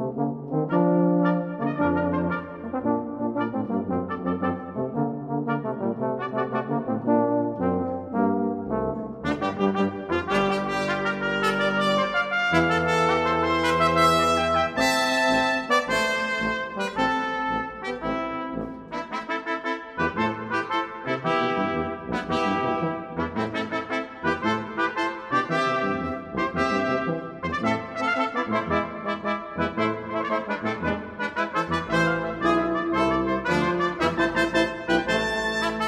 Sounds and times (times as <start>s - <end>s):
Trumpet: 0.0s - 35.8s.